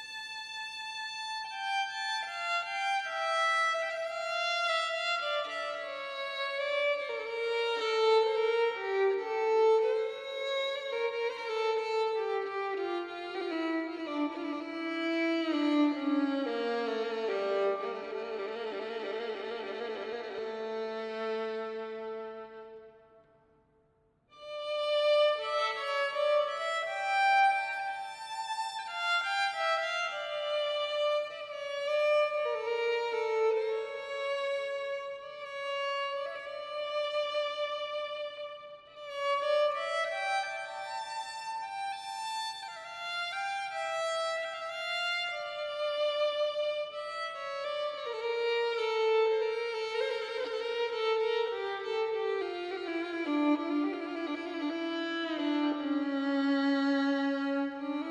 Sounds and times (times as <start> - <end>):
Violin, fiddle: 0.0 - 22.9, 24.3 - 58.1.